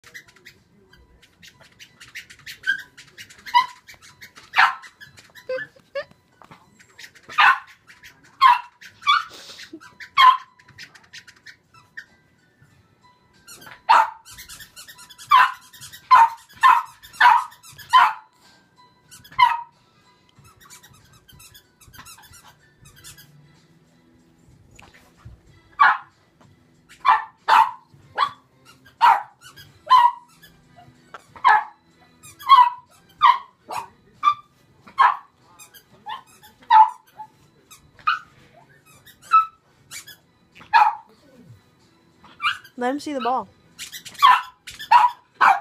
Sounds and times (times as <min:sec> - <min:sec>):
Domestic animals, pets: 0:00.0 - 0:12.2, 0:13.4 - 0:23.4, 0:24.8 - 0:26.2, 0:26.8 - 0:45.6
Inside, small room: 0:00.0 - 0:45.6.